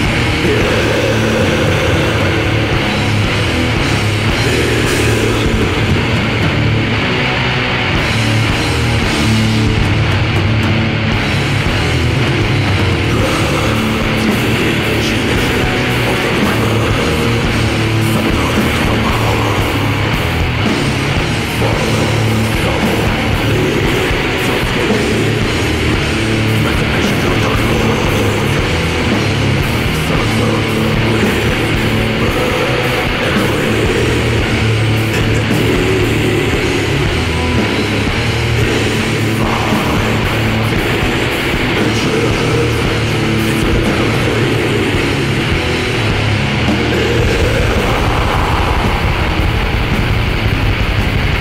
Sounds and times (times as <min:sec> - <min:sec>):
Speech: 0:00.0 - 0:06.4, 0:13.0 - 0:46.0, 0:46.6 - 0:50.0
Music: 0:00.0 - 0:51.4.